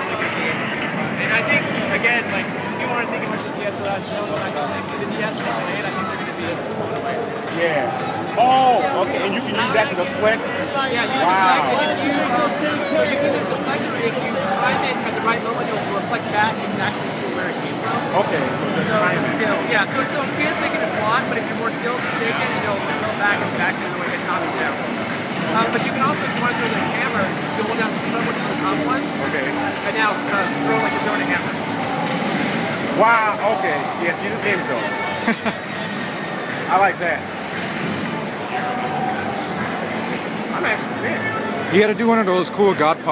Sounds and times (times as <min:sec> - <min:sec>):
Speech: 0:00.0 - 0:24.8, 0:25.4 - 0:31.7
Music: 0:00.0 - 0:43.1.